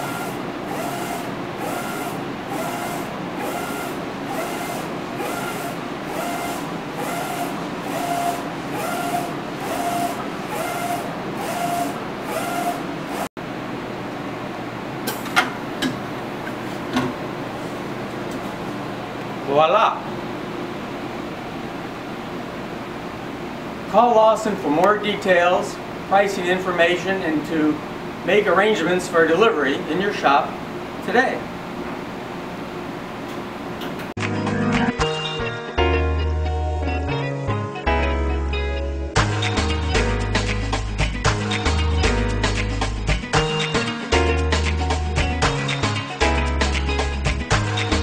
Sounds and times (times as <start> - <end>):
Printer: 0.0 - 13.3
Speech: 19.4 - 20.2, 23.9 - 31.5.